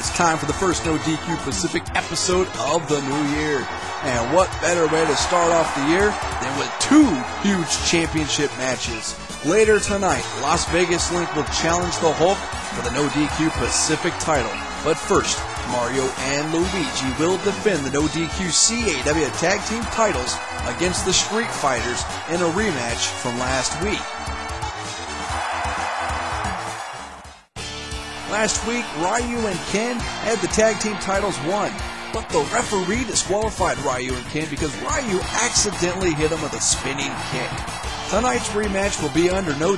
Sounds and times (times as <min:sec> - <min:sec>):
Speech: 0:00.0 - 0:24.0, 0:28.3 - 0:39.7
Music: 0:00.0 - 0:39.7.